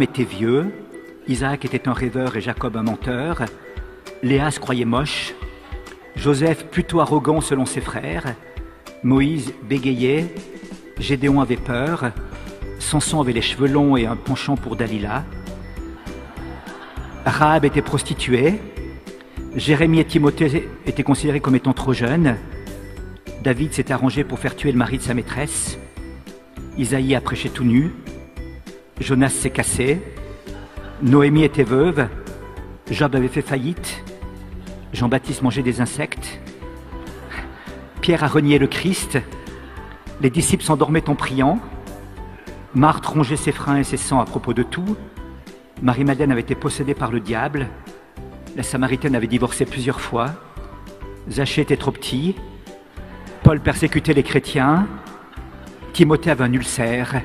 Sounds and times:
Speech: 0.0s - 3.6s, 4.2s - 8.4s, 9.0s - 10.4s, 11.0s - 12.2s, 12.8s - 15.3s, 17.3s - 18.7s, 19.6s - 22.4s, 23.4s - 25.8s, 26.8s - 28.0s, 29.0s - 30.2s, 31.0s - 32.2s, 32.9s - 34.0s, 34.9s - 36.4s, 37.3s - 39.3s, 40.2s - 41.7s, 42.8s - 45.0s, 45.8s - 47.8s, 48.6s - 50.4s, 51.3s - 52.4s, 53.4s - 55.0s, 56.0s - 57.2s
Music: 0.0s - 57.2s.

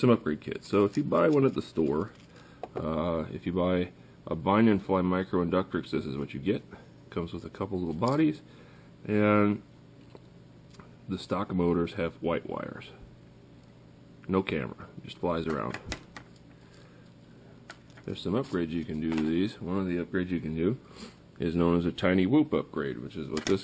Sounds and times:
Speech: 0.0s - 2.2s, 2.8s - 8.4s, 9.0s - 9.7s, 11.1s - 13.0s, 14.2s - 15.9s, 18.0s - 20.8s, 21.4s - 23.6s.

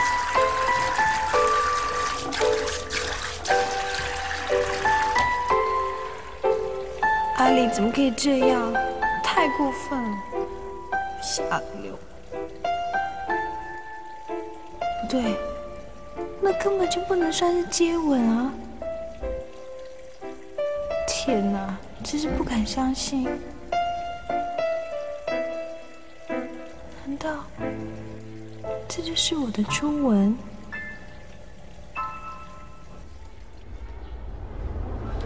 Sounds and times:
Music: 0.0s - 33.1s
Water: 0.0s - 35.2s
Speech: 7.4s - 10.2s, 11.2s - 12.0s, 15.0s - 15.4s, 16.4s - 18.6s, 21.1s - 23.4s, 27.0s - 27.6s, 28.9s - 30.5s.

